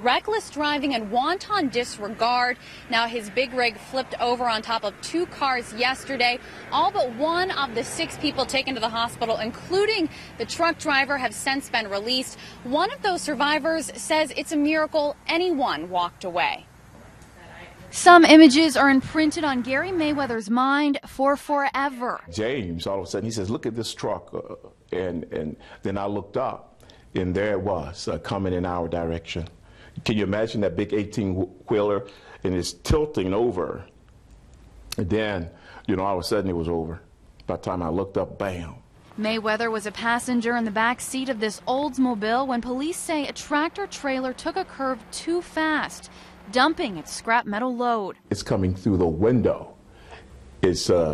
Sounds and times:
Car: 0:00.1 - 0:15.0
Speech: 0:17.4 - 0:33.9, 0:35.0 - 0:49.7, 0:50.6 - 0:51.1.

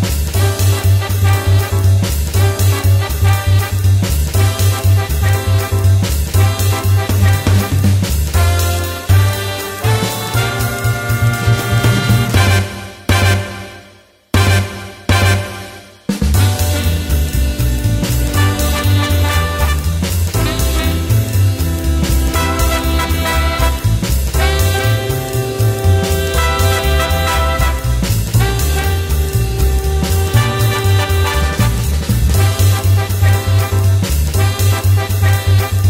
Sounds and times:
Swing music: 0:00.0 - 0:35.8.

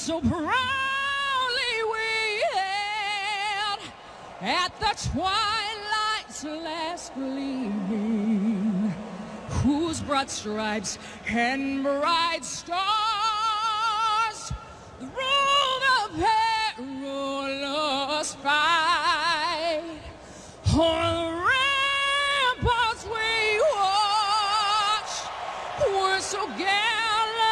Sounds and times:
Female singing: 0:00.0 - 0:27.5.

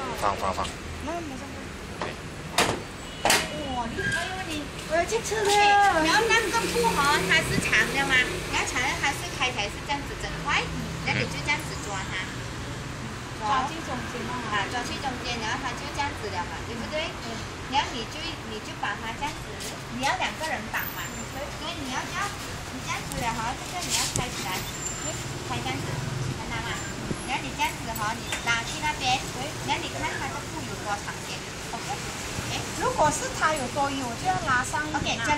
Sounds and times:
Speech: 0:03.5 - 0:12.3, 0:13.4 - 0:35.3.

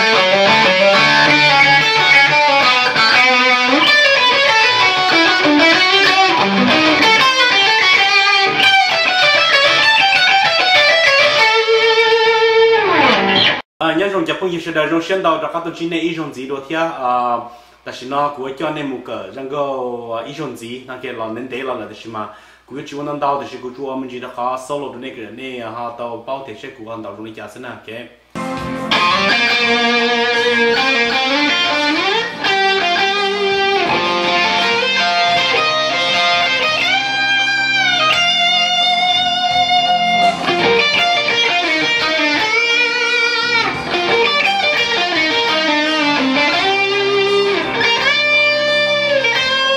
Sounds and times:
Electric guitar: 0:00.0 - 0:13.6, 0:28.4 - 0:49.7
Speech: 0:13.8 - 0:28.2
Strum: 0:28.4 - 0:49.7.

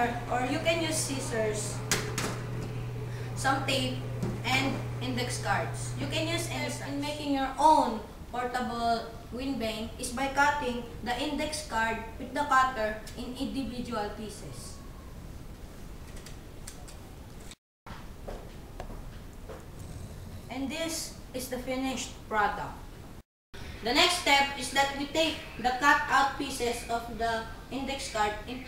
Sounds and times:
Speech: 0:00.0 - 0:01.9, 0:03.4 - 0:14.8, 0:20.5 - 0:22.8, 0:23.8 - 0:28.6.

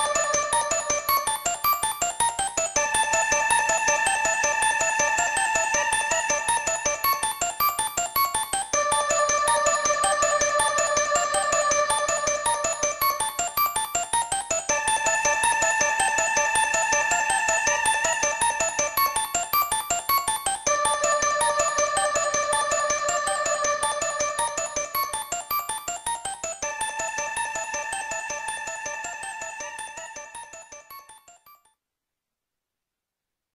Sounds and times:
Music: 0:00.0 - 0:31.8.

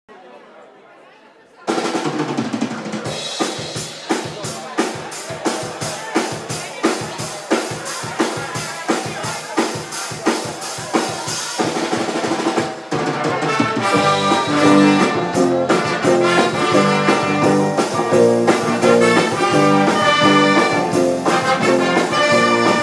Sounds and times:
Drum kit: 0:01.7 - 0:22.8
Drum roll: 0:01.7 - 0:22.8
Rimshot: 0:09.1 - 0:22.8.

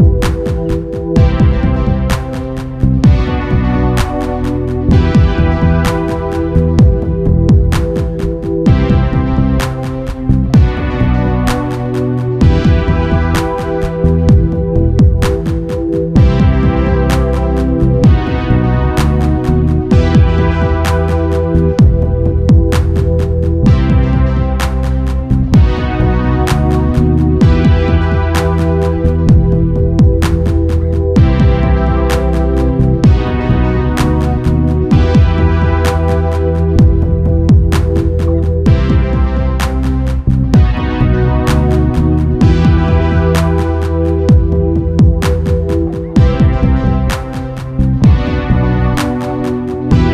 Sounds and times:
Music: 0:00.0 - 0:50.1.

